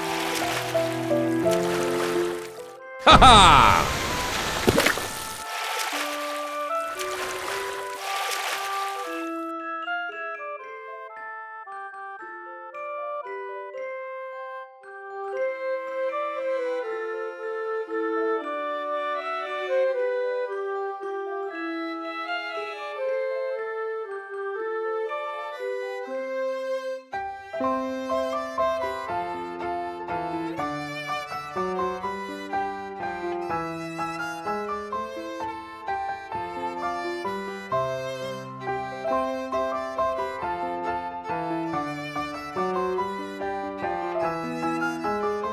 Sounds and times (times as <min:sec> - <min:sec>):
Music: 0:00.0 - 0:03.1, 0:03.7 - 0:45.5.